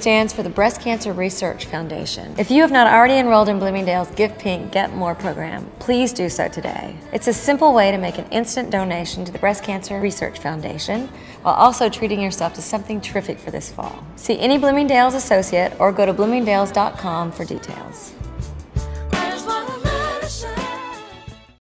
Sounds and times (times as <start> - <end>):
Speech: 0.0 - 18.2
Music: 0.0 - 21.6.